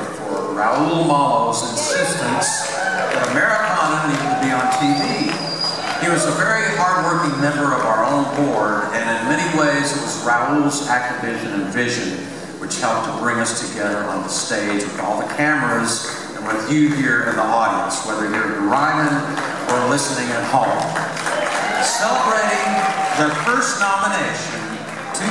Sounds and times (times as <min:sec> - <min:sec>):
Speech: 0:00.0 - 0:05.4, 0:06.0 - 0:21.0, 0:21.8 - 0:25.3.